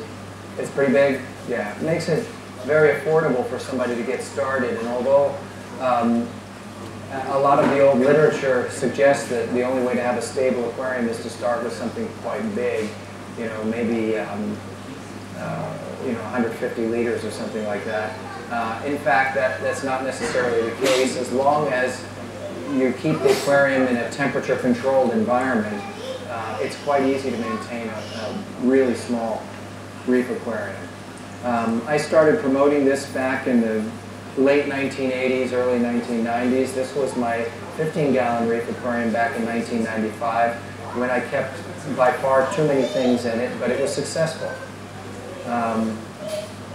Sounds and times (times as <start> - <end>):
Speech: 0.0 - 6.4, 7.1 - 14.6, 15.4 - 29.5, 30.1 - 44.7, 45.4 - 46.4.